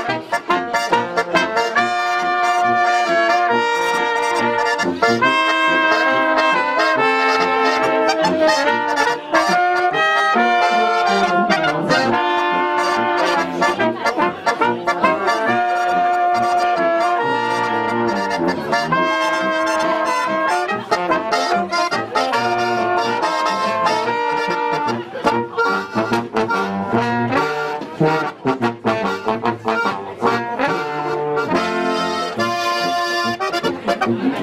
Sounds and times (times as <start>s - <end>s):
Trombone: 0.0s - 34.4s
Trumpet: 0.0s - 34.4s.